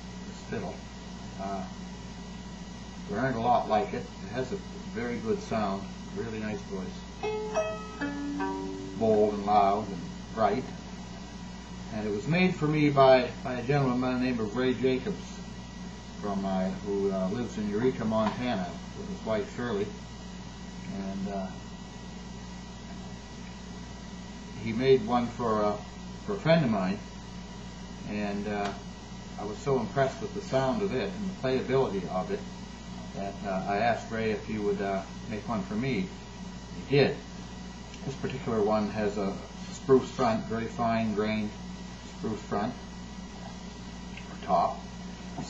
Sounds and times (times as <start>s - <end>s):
Speech: 0.2s - 1.8s, 3.1s - 7.1s, 9.0s - 10.8s, 11.9s - 15.5s, 16.2s - 20.0s, 20.9s - 21.6s, 24.6s - 27.1s, 28.0s - 28.8s, 29.4s - 32.5s, 33.1s - 36.2s, 36.8s - 37.3s, 38.0s - 42.8s, 44.3s - 45.5s.